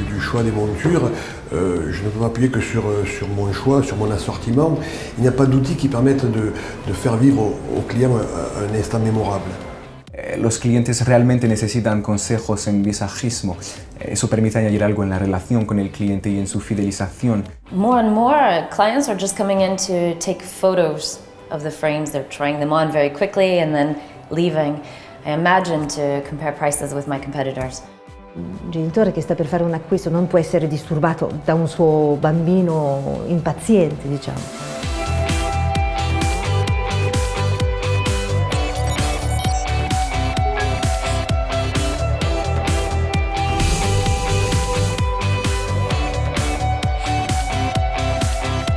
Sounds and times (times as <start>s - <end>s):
Speech: 0.0s - 27.8s, 28.4s - 34.5s
Music: 0.0s - 48.7s.